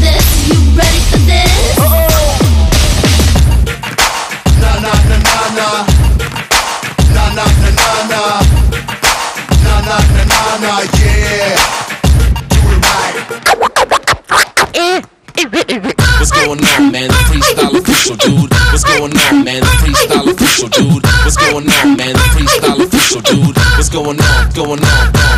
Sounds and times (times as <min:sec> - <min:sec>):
Music: 0:00.0 - 0:25.3.